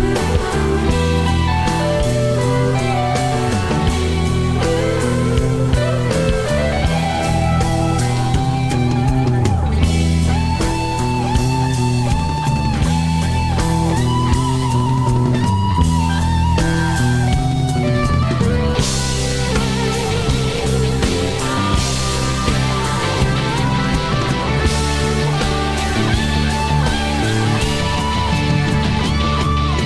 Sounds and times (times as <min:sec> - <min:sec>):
Rock music: 0:00.0 - 0:29.8.